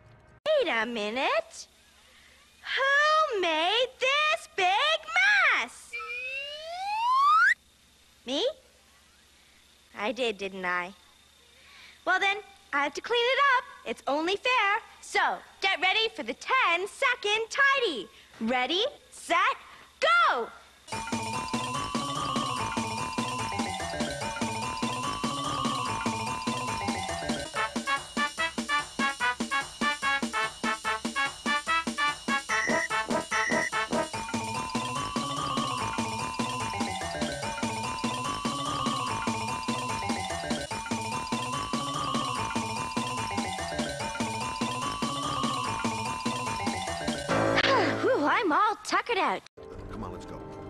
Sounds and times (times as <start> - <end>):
Music: 0.0 - 0.4, 20.9 - 48.1, 49.6 - 50.6
Speech: 0.5 - 1.7, 2.7 - 5.9, 8.3 - 8.6, 9.9 - 11.0, 12.1 - 20.6, 48.1 - 50.4.